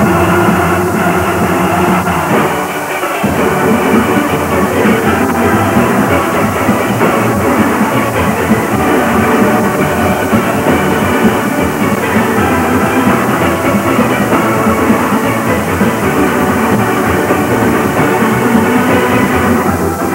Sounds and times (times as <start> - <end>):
Drum: 0.0 - 20.1.